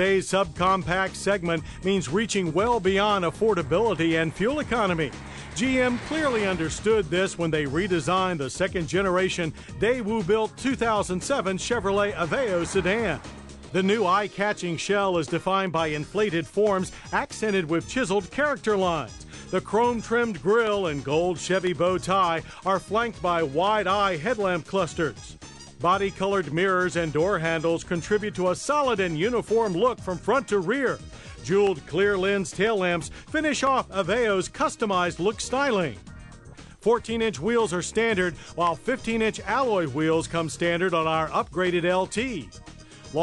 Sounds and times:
Speech: 0.0 - 13.2, 13.8 - 36.0, 36.8 - 42.5
Music: 0.0 - 43.2.

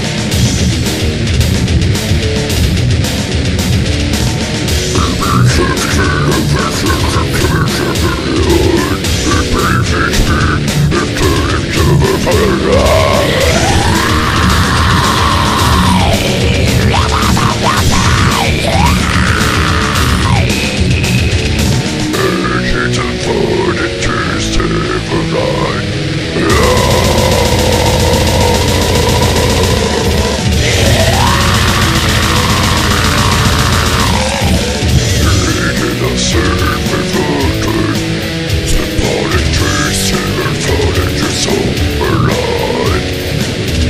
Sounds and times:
Music: 0.0 - 43.8.

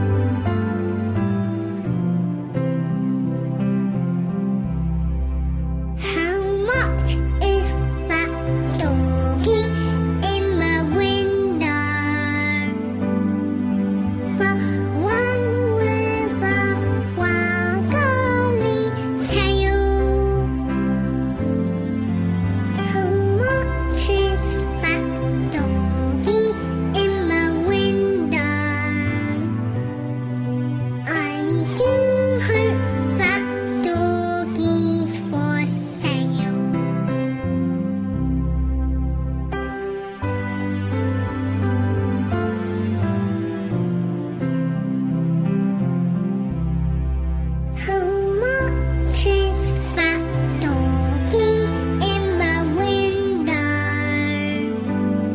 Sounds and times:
Music: 0.0 - 55.3
Child singing: 6.0 - 12.8, 14.4 - 20.6, 22.8 - 29.6, 31.1 - 36.8, 47.8 - 54.7.

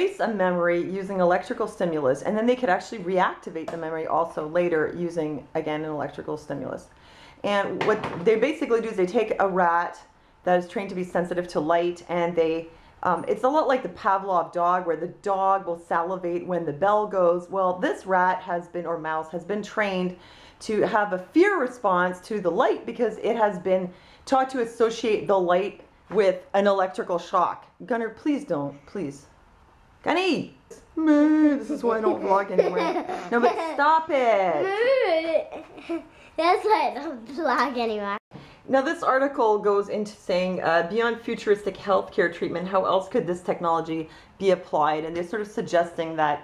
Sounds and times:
Female speech, woman speaking: 0.0 - 29.3, 30.0 - 34.8, 38.7 - 46.4.

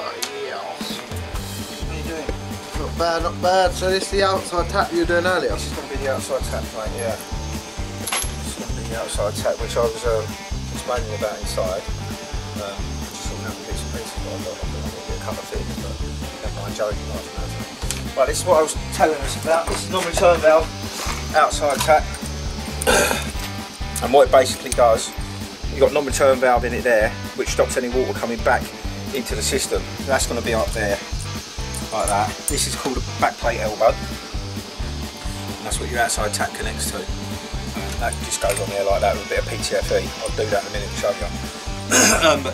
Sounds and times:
Speech: 0.0 - 1.1, 1.9 - 7.2, 8.4 - 11.9, 12.6 - 17.6, 18.2 - 20.7, 21.3 - 22.1, 24.0 - 31.1, 31.9 - 34.0, 35.5 - 37.2, 38.0 - 42.5
Music: 0.0 - 42.5.

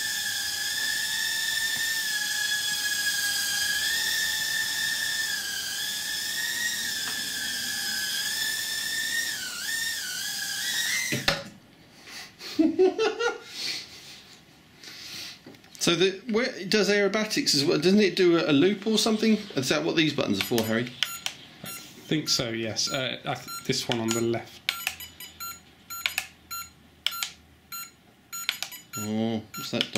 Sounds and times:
Inside, small room: 0.0 - 29.9
Speech: 15.8 - 21.0, 22.1 - 24.6, 29.0 - 29.9.

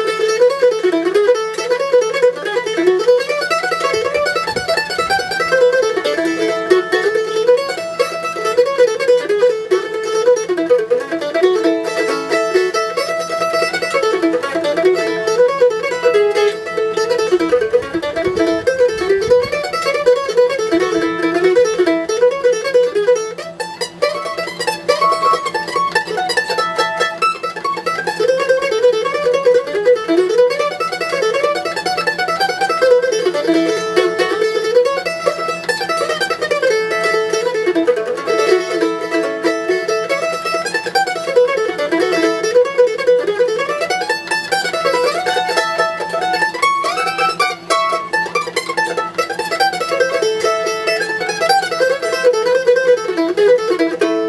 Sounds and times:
Country: 0.0 - 54.2
Mandolin: 0.0 - 54.2.

